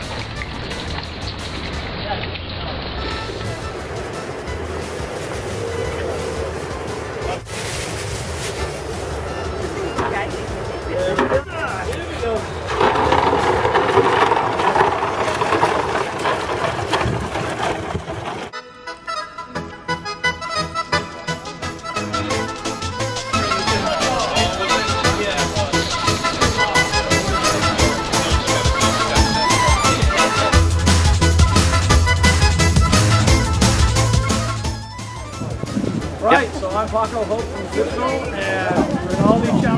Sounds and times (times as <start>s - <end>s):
Music: 0.0s - 1.9s, 3.0s - 13.2s, 18.5s - 39.7s
Water: 0.0s - 18.6s, 23.3s - 39.7s.